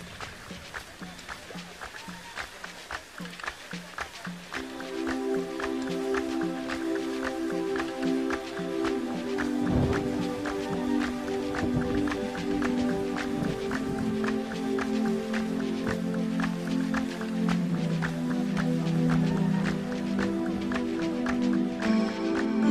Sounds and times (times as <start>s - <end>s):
Music: 0.0s - 22.7s
Stream: 0.0s - 22.7s.